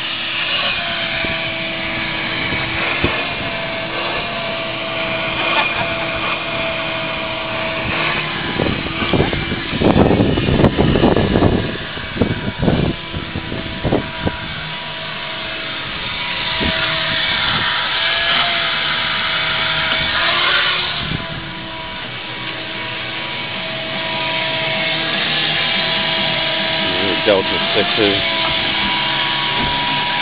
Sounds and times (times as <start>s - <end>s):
Car: 0.0s - 30.2s.